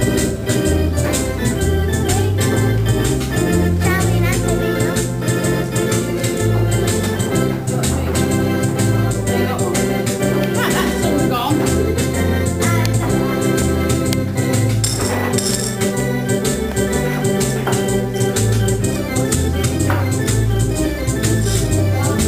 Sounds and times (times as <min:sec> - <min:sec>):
Electronic organ: 0:00.0 - 0:22.2.